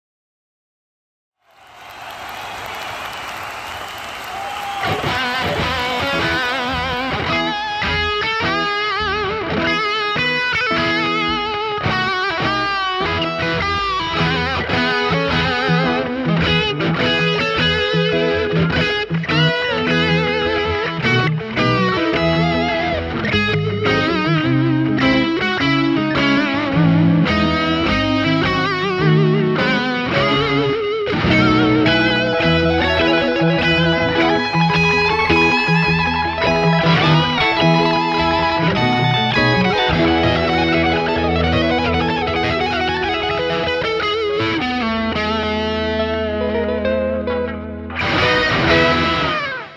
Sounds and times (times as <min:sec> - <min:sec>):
Electric guitar: 0:03.7 - 0:49.7.